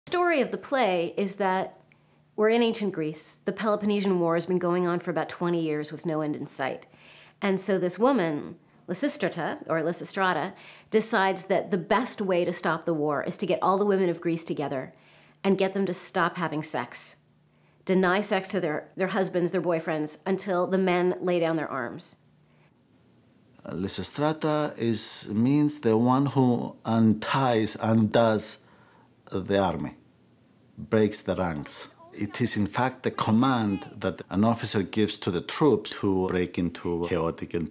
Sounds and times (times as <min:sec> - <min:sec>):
Female speech, woman speaking: 0:00.1 - 0:01.8, 0:02.4 - 0:17.2, 0:17.9 - 0:22.2, 0:32.0 - 0:34.0.